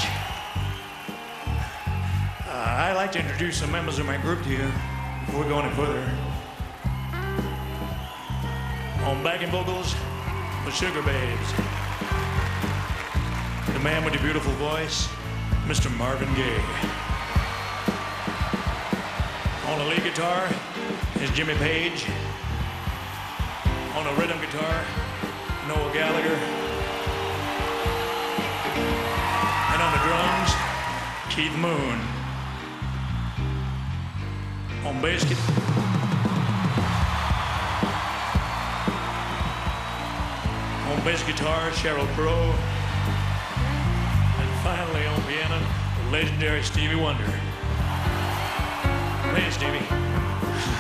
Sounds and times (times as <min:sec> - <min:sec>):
Music: 0:00.0 - 0:50.8
Speech: 0:02.5 - 0:06.4, 0:09.0 - 0:10.0, 0:10.6 - 0:11.6, 0:13.7 - 0:15.1, 0:15.7 - 0:16.9, 0:19.6 - 0:20.6, 0:21.2 - 0:22.2, 0:23.9 - 0:24.9, 0:25.7 - 0:26.5, 0:29.7 - 0:30.6, 0:31.3 - 0:32.1, 0:34.8 - 0:35.6, 0:40.9 - 0:42.6, 0:44.4 - 0:47.5, 0:49.3 - 0:49.9.